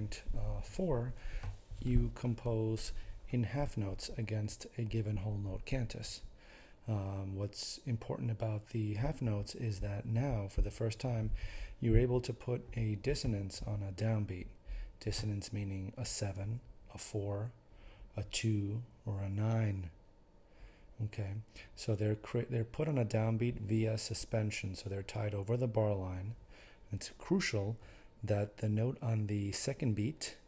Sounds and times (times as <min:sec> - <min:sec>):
Speech: 0:00.0 - 0:01.2, 0:01.8 - 0:06.3, 0:06.9 - 0:17.6, 0:18.2 - 0:20.0, 0:21.0 - 0:30.4.